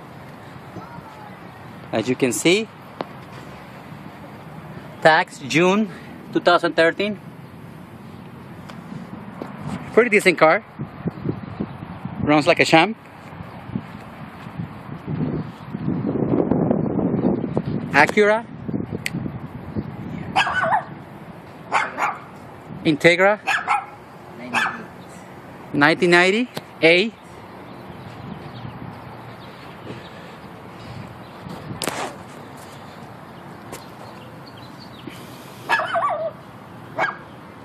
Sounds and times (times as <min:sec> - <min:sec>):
Bow-wow: 0:20.4 - 0:20.9, 0:21.7 - 0:22.3, 0:23.5 - 0:24.8, 0:37.0 - 0:37.2.